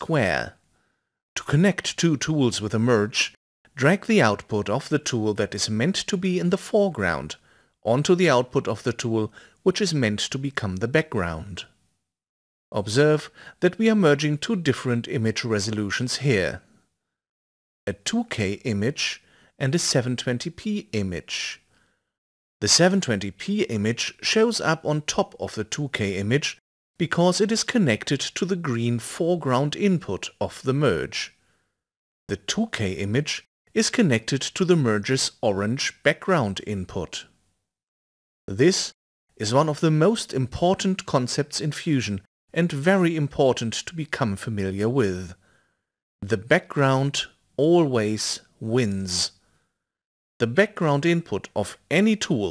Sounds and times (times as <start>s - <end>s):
Speech: 0.0s - 0.6s, 1.4s - 11.8s, 12.8s - 16.7s, 17.9s - 21.7s, 22.6s - 31.4s, 32.3s - 37.4s, 38.5s - 45.4s, 46.2s - 49.4s, 50.4s - 52.5s.